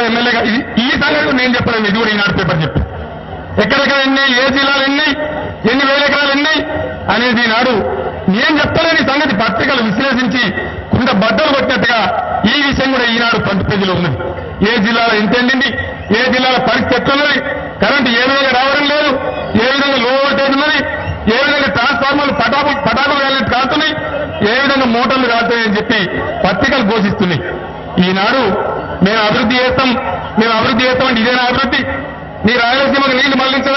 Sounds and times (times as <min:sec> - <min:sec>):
Male speech, man speaking: 0:00.0 - 0:02.8, 0:03.6 - 0:33.7
Narration, monologue: 0:00.0 - 0:33.7.